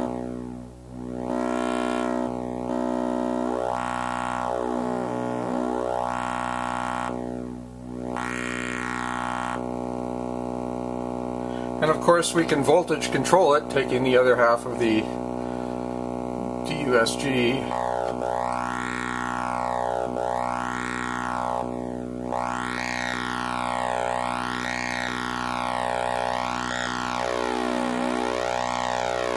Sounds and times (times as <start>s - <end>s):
Speech: 11.8s - 15.2s, 16.6s - 17.8s.